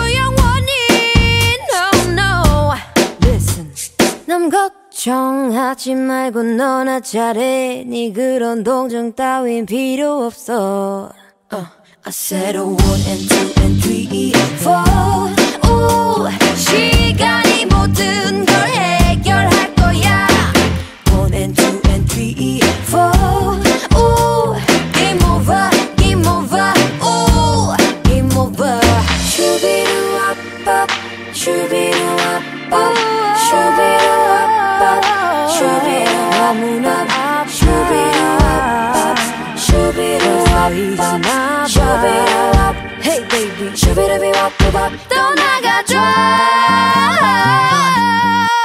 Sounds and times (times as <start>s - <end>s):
Happy music: 0.0s - 4.2s, 12.8s - 48.6s.